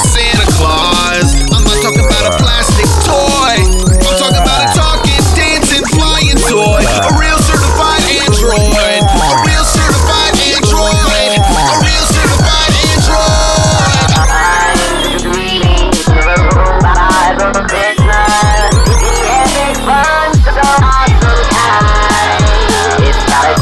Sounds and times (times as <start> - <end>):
Music: 0.0 - 23.6.